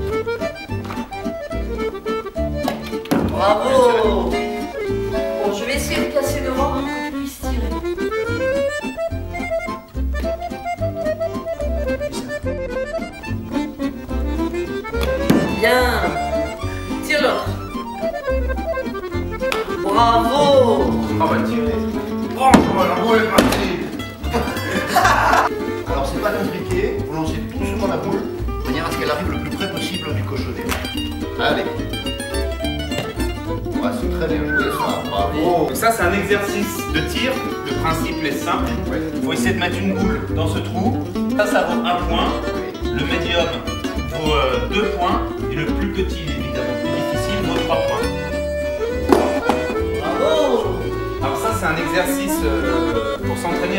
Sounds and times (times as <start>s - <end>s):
Music: 0.0s - 53.7s.